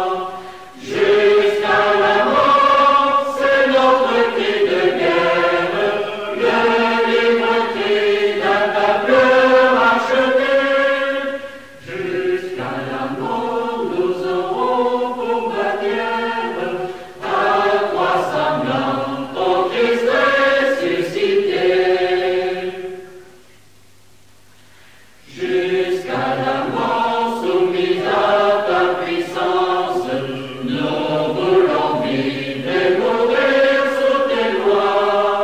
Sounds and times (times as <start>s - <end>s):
Mantra: 0.0s - 23.4s, 25.2s - 35.4s.